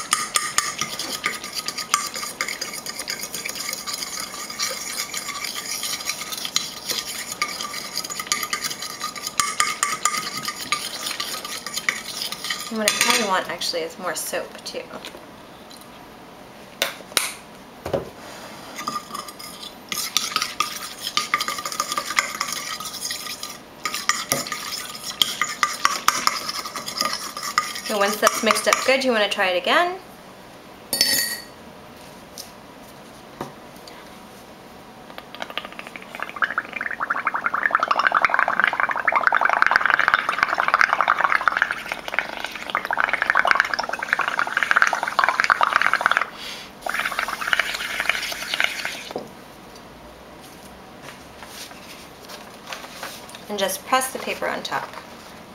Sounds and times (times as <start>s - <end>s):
Stir: 0.0s - 13.4s, 18.7s - 29.0s, 35.4s - 49.2s.